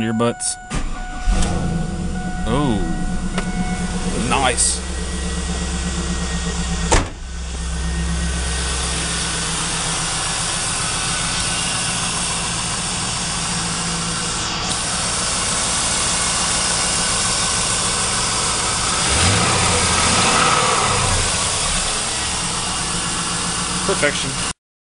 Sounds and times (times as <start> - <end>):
Speech: 0.0 - 0.6, 2.5 - 3.0, 4.2 - 4.8, 23.9 - 24.5.